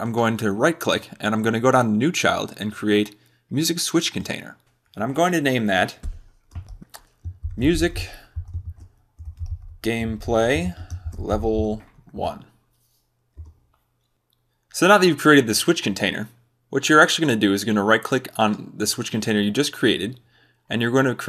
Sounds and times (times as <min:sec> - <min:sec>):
Speech: 0:00.0 - 0:06.1, 0:07.6 - 0:08.3, 0:09.8 - 0:12.6, 0:14.8 - 0:21.2.